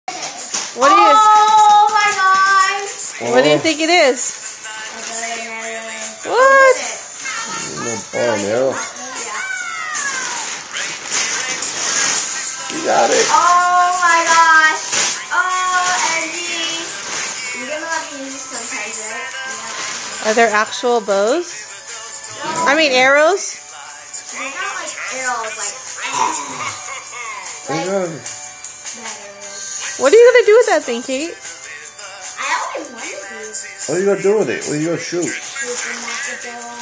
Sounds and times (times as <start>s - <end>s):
Child speech, kid speaking: 0.1s - 3.0s, 4.9s - 10.5s, 13.2s - 16.9s, 17.6s - 19.2s, 24.3s - 26.5s, 29.0s - 29.6s, 32.4s - 33.5s, 35.5s - 36.8s
Music: 0.1s - 36.8s.